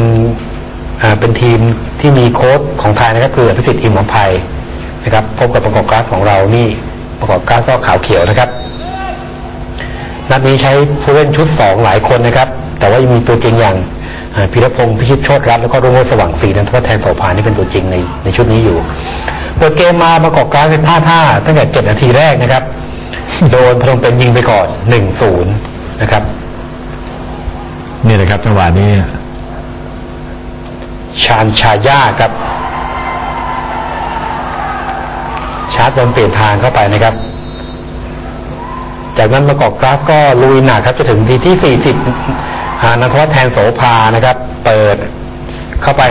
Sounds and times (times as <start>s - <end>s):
Speech: 0.0s - 9.4s, 10.3s - 19.0s, 19.6s - 22.7s, 23.3s - 26.4s, 28.0s - 29.2s, 31.1s - 32.4s, 35.8s - 37.2s, 39.2s - 42.1s, 42.8s - 45.2s, 45.8s - 46.1s.